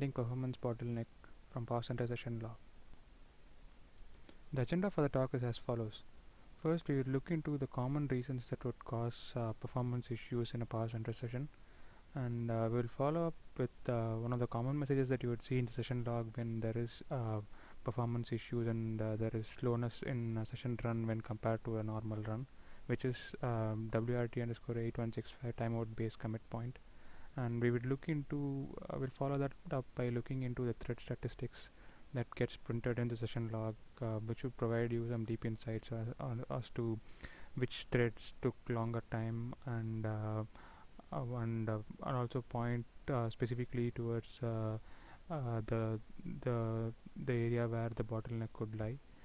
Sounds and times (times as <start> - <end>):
Speech: 0.0 - 2.6, 4.5 - 11.6, 12.2 - 26.8, 27.4 - 37.0, 37.6 - 49.0.